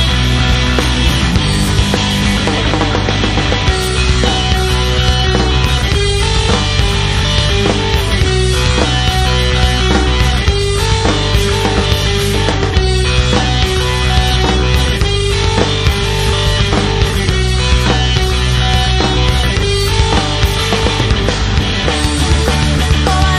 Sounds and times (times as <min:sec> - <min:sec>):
Music: 0:00.0 - 0:23.3.